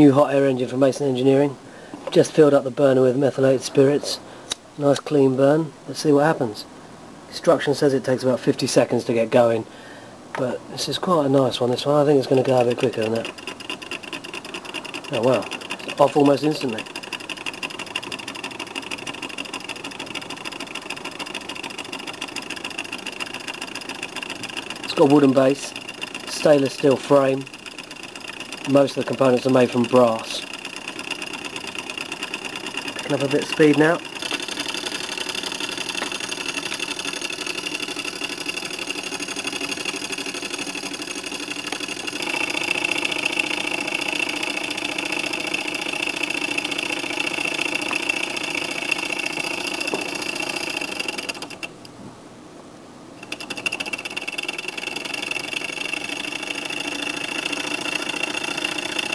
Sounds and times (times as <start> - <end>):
Speech: 0.0 - 4.2, 4.8 - 6.7, 7.3 - 9.7, 10.4 - 13.3, 15.1 - 16.8, 24.9 - 27.5, 28.7 - 30.4, 33.0 - 34.0.